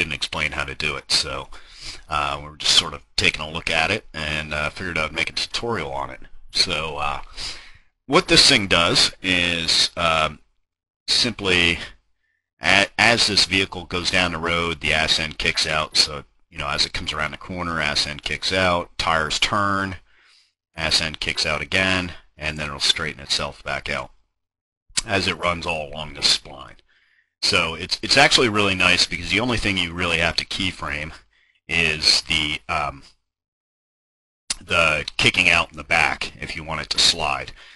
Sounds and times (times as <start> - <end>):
Speech: 0.0 - 10.4, 11.1 - 12.0, 12.6 - 20.1, 20.8 - 24.1, 25.0 - 26.8, 27.4 - 33.1, 34.5 - 37.7.